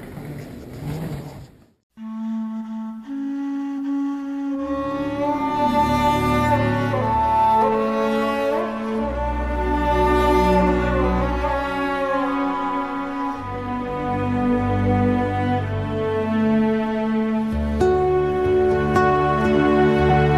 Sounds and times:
Cello: 0:02.0 - 0:20.3.

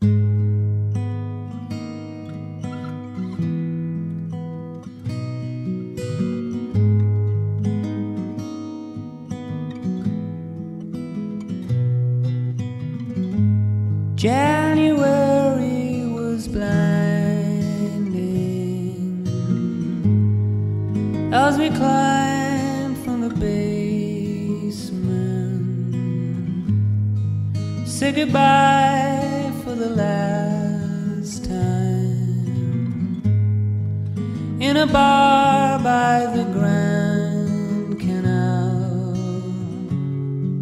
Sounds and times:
Music: 0:00.0 - 0:40.6.

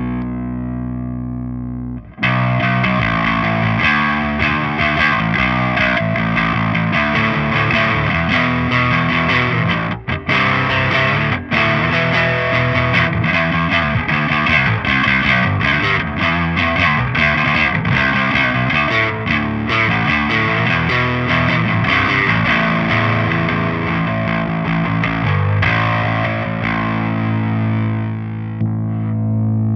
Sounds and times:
Music: 0:00.0 - 0:29.7.

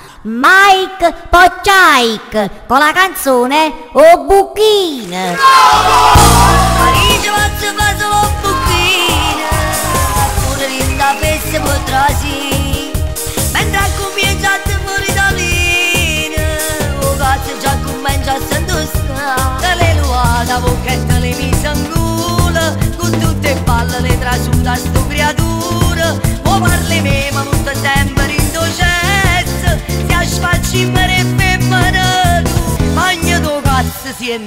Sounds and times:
Speech: 0:00.3 - 0:05.5
Dance music: 0:05.4 - 0:34.4.

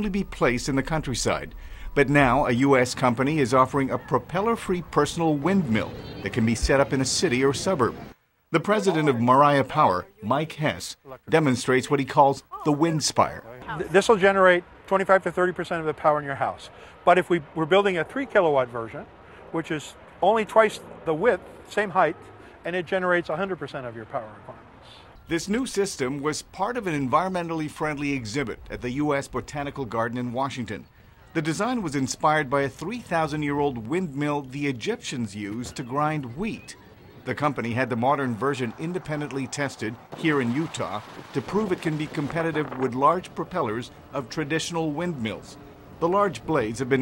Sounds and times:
Speech: 0:00.0 - 0:08.0, 0:08.6 - 0:24.6, 0:25.3 - 0:47.0.

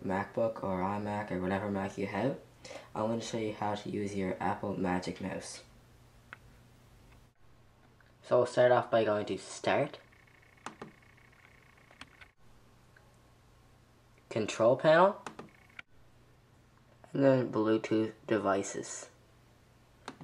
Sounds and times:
Speech: 0:00.0 - 0:02.4, 0:03.0 - 0:05.7, 0:08.2 - 0:10.0, 0:14.3 - 0:15.2, 0:17.1 - 0:19.2.

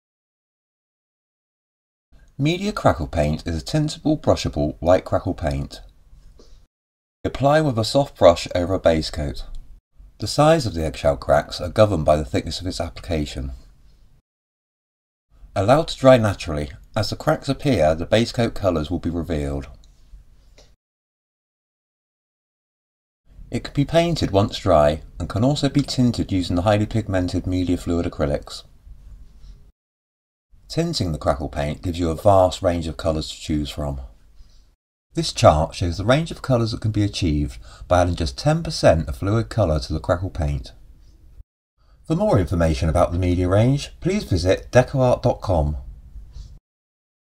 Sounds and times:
Speech: 0:02.4 - 0:06.0, 0:07.3 - 0:09.6, 0:10.2 - 0:13.7, 0:15.6 - 0:19.8, 0:23.5 - 0:28.7, 0:30.7 - 0:34.2, 0:35.2 - 0:40.8, 0:42.1 - 0:45.9.

